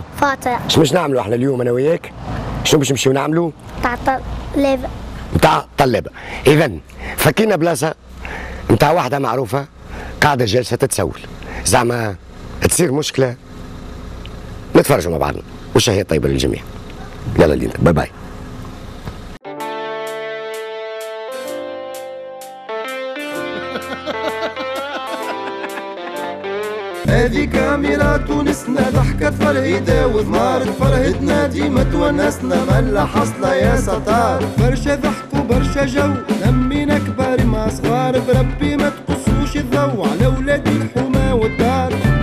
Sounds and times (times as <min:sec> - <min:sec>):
Music: 0:19.4 - 0:42.2.